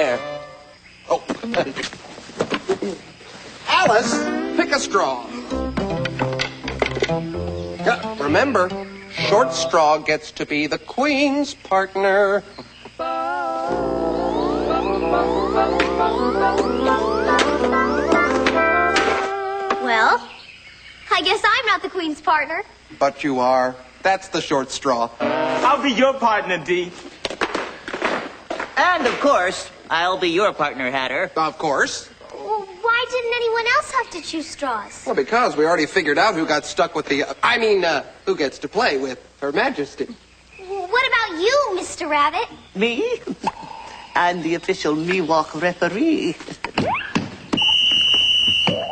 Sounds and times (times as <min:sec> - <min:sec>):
Music: 0:00.0 - 0:00.7, 0:04.0 - 0:09.9, 0:13.0 - 0:19.9.